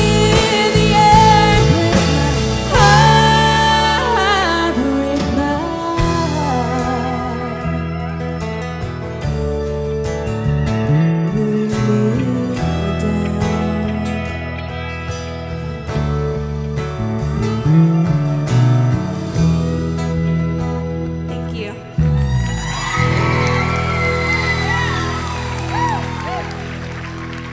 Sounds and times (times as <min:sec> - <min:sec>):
Pop music: 0:00.0 - 0:07.0.